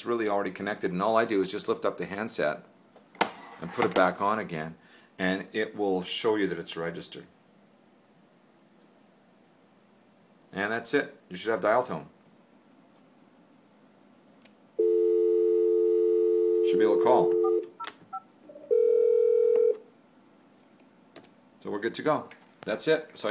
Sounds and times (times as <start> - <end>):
Speech: 0.0 - 2.7, 3.6 - 7.3, 10.5 - 12.2, 16.6 - 17.4, 21.6 - 23.3.